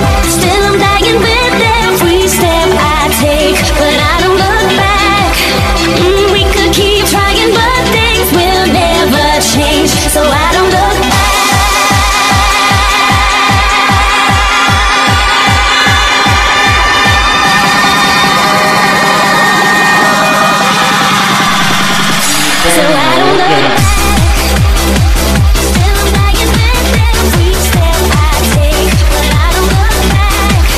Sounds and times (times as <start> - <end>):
Music: 0.0 - 30.7.